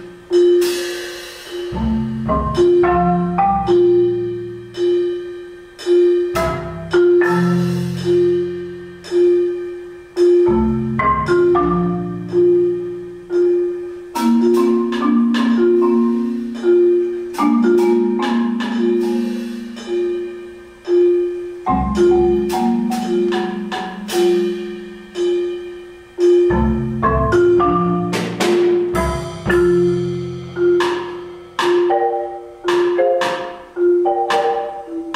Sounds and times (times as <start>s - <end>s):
Music: 0.0s - 35.1s.